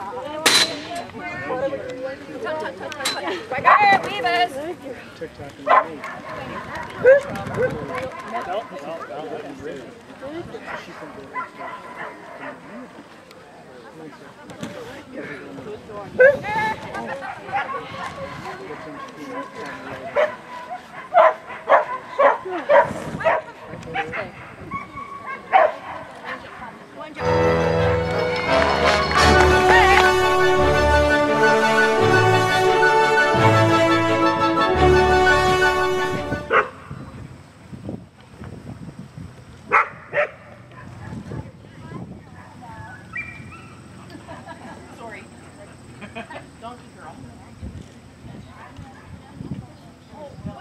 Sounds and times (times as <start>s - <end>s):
Bow-wow: 18.6s - 26.6s, 36.5s - 36.8s, 39.7s - 40.6s.